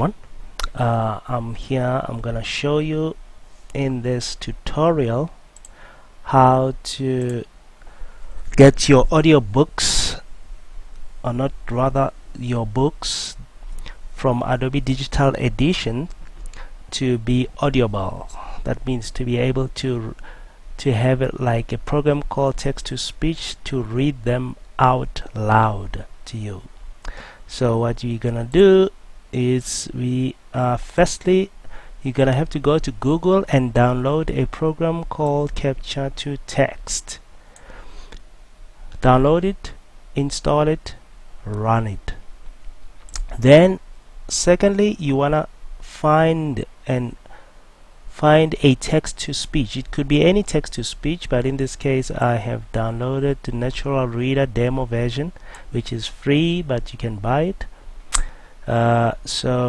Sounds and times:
Speech: 0:00.0 - 0:05.4, 0:06.3 - 0:07.5, 0:08.5 - 0:10.2, 0:11.2 - 0:13.5, 0:14.2 - 0:16.2, 0:16.9 - 0:20.2, 0:20.8 - 0:26.7, 0:27.5 - 0:37.2, 0:39.0 - 0:42.2, 0:43.2 - 0:47.2, 0:48.1 - 0:57.7, 0:58.7 - 0:59.6.

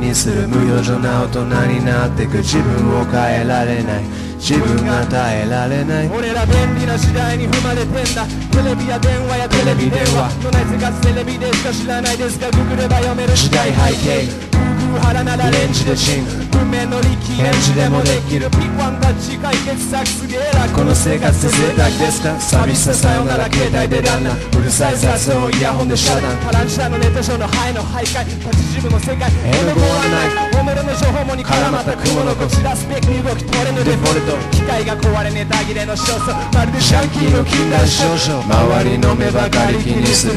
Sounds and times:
Hip hop music: 0:00.0 - 0:40.3
Singing: 0:00.0 - 0:40.3.

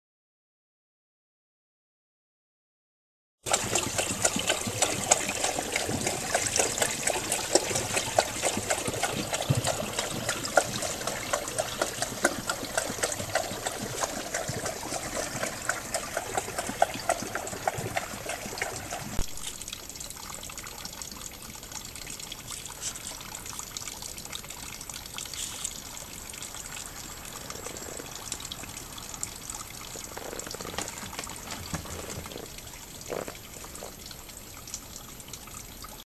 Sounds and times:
Liquid: 0:03.4 - 0:36.0
Water: 0:03.4 - 0:36.0
Water tap, faucet: 0:03.5 - 0:36.0.

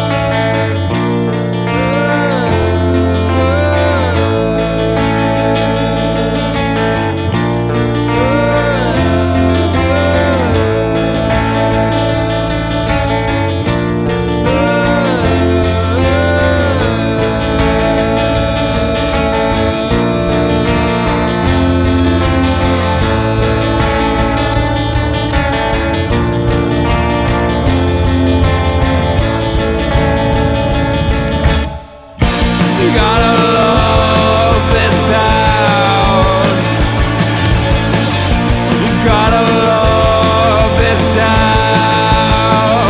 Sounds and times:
Grunge: 0:00.0 - 0:42.8.

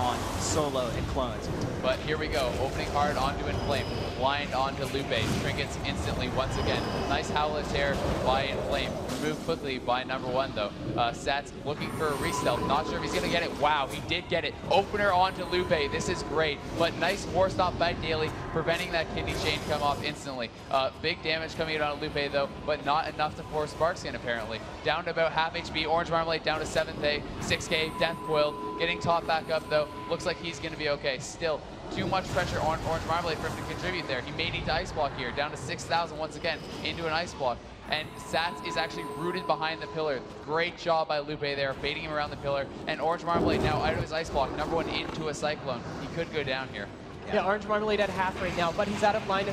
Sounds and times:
Speech: 0:00.0 - 0:49.5.

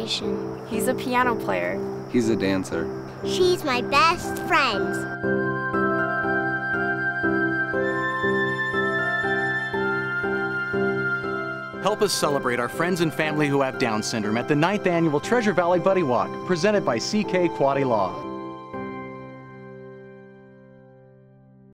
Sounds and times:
Music: 0:00.0 - 0:21.7.

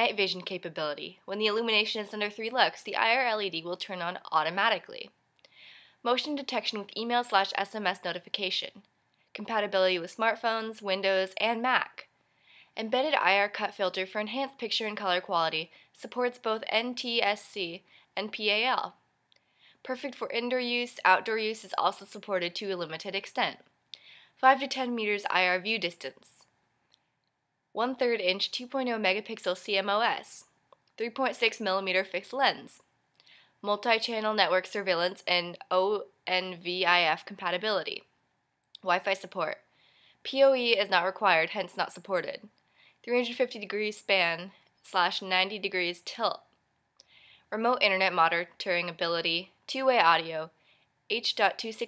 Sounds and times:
Speech: 0:00.0 - 0:05.2, 0:06.0 - 0:08.8, 0:09.4 - 0:12.1, 0:12.8 - 0:19.0, 0:19.8 - 0:23.6, 0:24.4 - 0:26.5, 0:27.8 - 0:32.8, 0:33.6 - 0:38.1, 0:38.8 - 0:39.6, 0:40.3 - 0:42.5, 0:43.1 - 0:46.5, 0:47.6 - 0:50.5, 0:51.1 - 0:51.8.

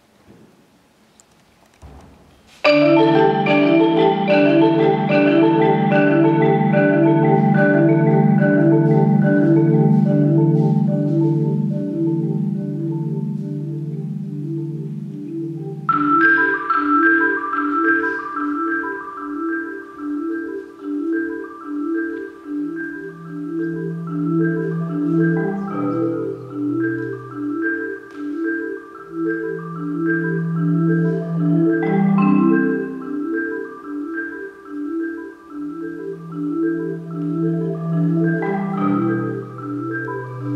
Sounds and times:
Percussion: 0:01.3 - 0:40.5.

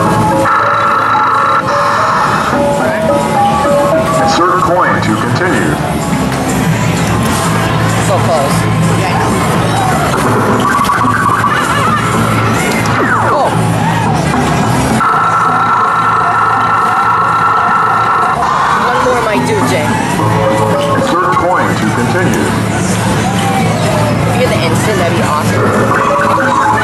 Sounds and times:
Music: 0:00.0 - 0:26.8.

